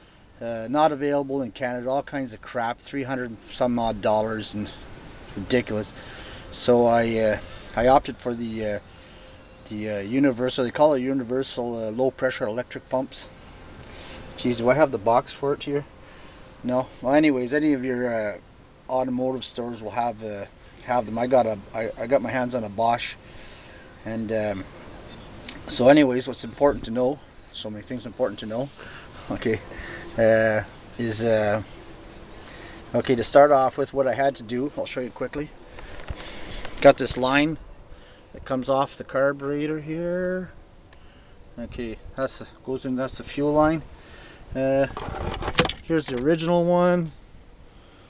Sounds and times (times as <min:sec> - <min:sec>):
Outside, urban or manmade: 0:00.0 - 0:48.0
Speech: 0:00.4 - 0:05.9, 0:06.5 - 0:08.8, 0:09.6 - 0:13.3, 0:14.4 - 0:15.9, 0:16.6 - 0:23.2, 0:24.0 - 0:24.8, 0:25.5 - 0:29.6, 0:30.2 - 0:31.7, 0:32.9 - 0:35.5, 0:36.8 - 0:37.6, 0:38.4 - 0:40.6, 0:41.6 - 0:43.9, 0:44.5 - 0:45.0, 0:45.8 - 0:47.1.